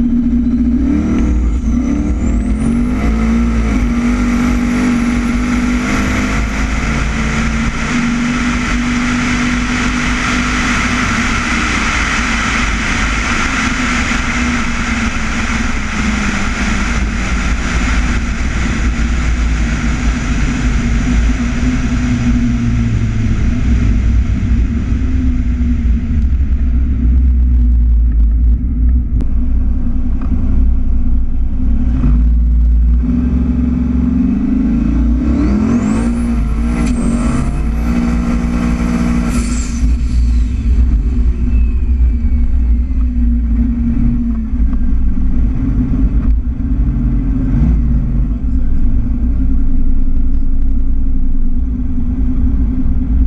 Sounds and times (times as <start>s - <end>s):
Car: 0.0s - 53.2s
Outside, urban or manmade: 0.0s - 53.2s
Speech: 48.0s - 49.7s.